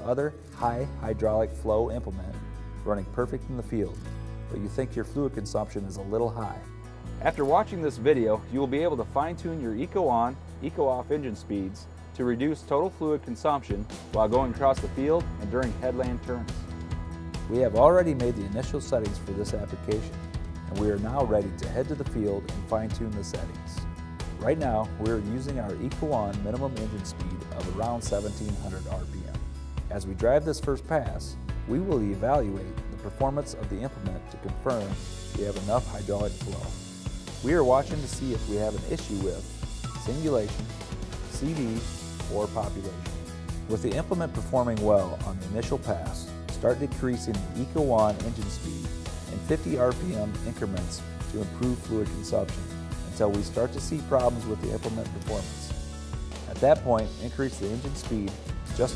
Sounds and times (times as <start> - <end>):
Speech: 0.0 - 16.6, 17.5 - 23.8, 24.4 - 36.8, 37.4 - 40.7, 41.3 - 43.0, 43.7 - 55.8, 56.5 - 58.9
Music: 0.0 - 58.9.